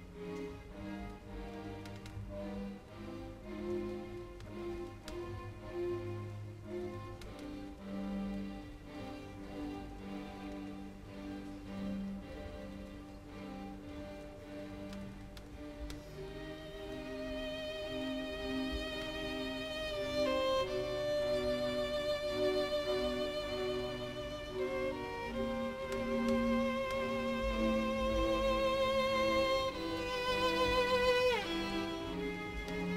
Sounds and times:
Violin, fiddle: 0.0s - 32.9s.

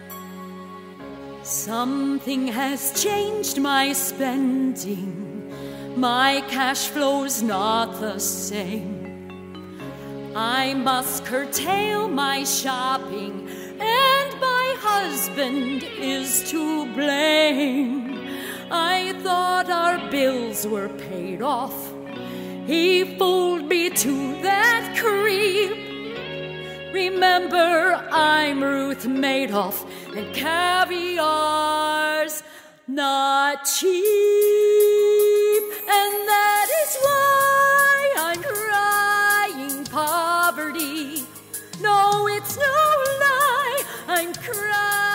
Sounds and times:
Music: 0.0s - 45.1s.

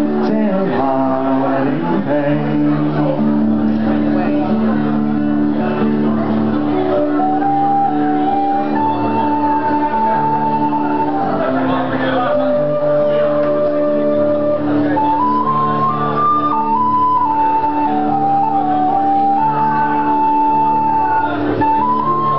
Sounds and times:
Bowed string instrument: 0.0s - 22.3s
Inside, large room or hall: 0.0s - 22.3s
Speech: 9.8s - 16.2s.

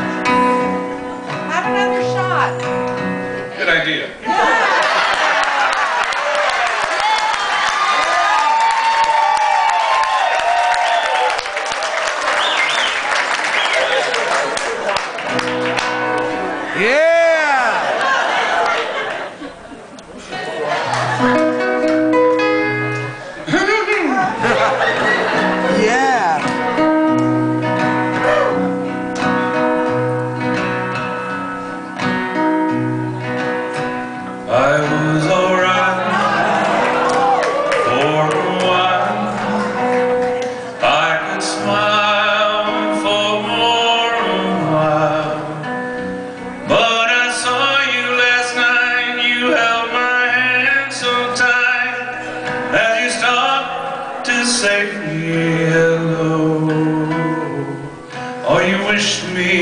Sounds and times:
Music: 0.0s - 4.0s, 15.0s - 17.2s, 20.8s - 59.6s
Speech: 25.8s - 26.4s.

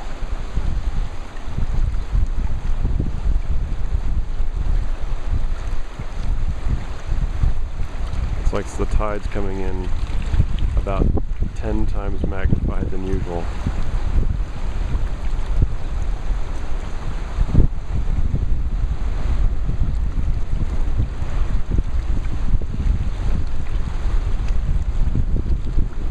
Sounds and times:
Ocean: 0.0s - 26.1s
Speech: 8.4s - 9.9s, 10.8s - 13.5s.

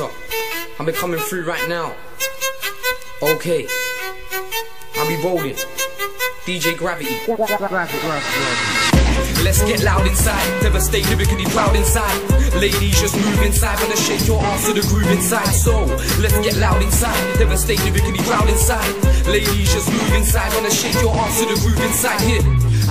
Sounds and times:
Hip hop music: 0.0s - 22.9s
Speech: 0.8s - 2.0s, 3.2s - 3.8s, 5.0s - 5.6s, 6.5s - 8.6s
Rapping: 6.6s - 22.9s.

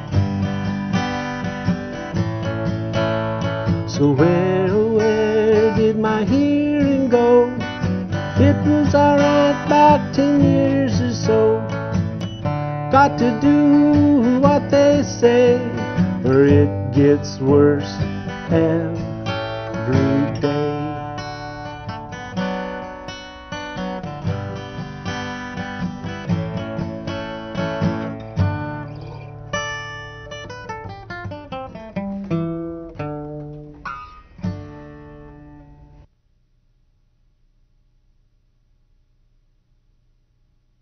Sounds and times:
Acoustic guitar: 0.0s - 36.2s.

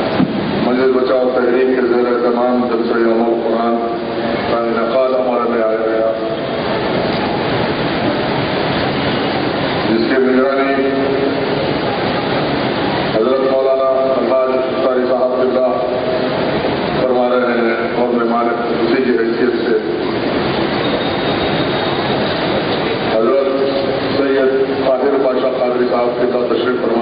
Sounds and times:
Narration, monologue: 0.0s - 6.5s, 9.8s - 11.6s, 13.1s - 20.2s, 23.1s - 27.0s
Male speech, man speaking: 0.7s - 6.3s, 9.9s - 11.2s, 13.2s - 16.0s, 17.0s - 20.0s, 23.1s - 27.0s.

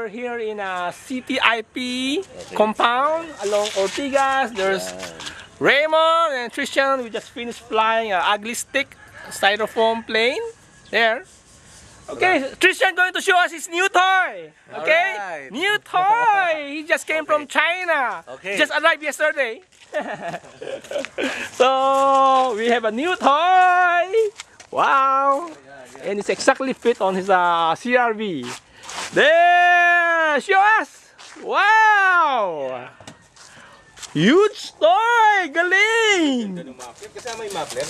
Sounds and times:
Speech: 0.0s - 11.3s, 12.1s - 19.6s, 21.6s - 28.6s, 29.2s - 32.9s, 34.2s - 37.9s.

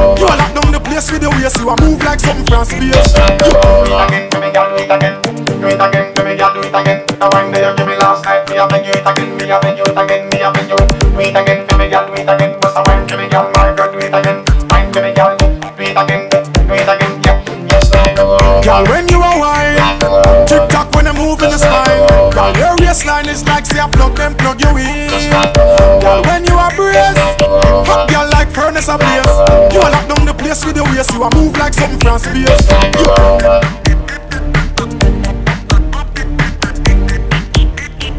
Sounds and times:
Reggae: 0.0s - 38.1s.

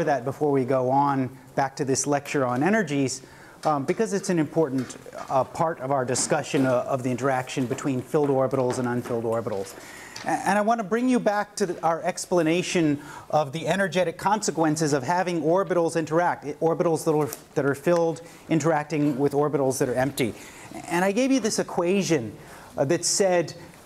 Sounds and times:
Speech: 0.0s - 23.7s.

